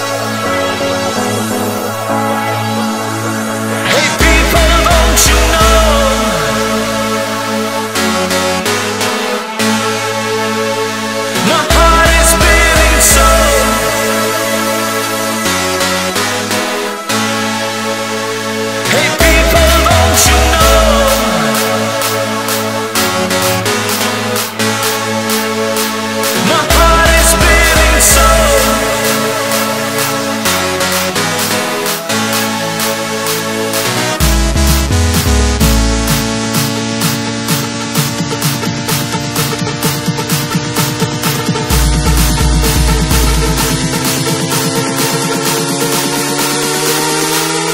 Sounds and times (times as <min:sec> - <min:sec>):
Electronic dance music: 0:00.0 - 0:47.7.